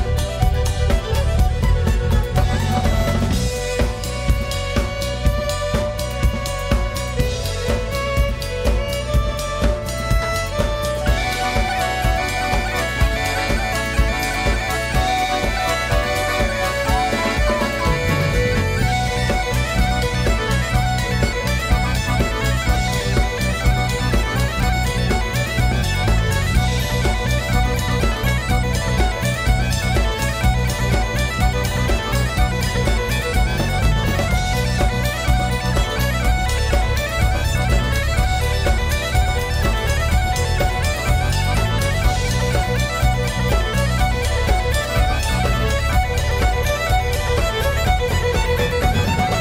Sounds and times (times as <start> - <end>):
Music: 0.0 - 49.4.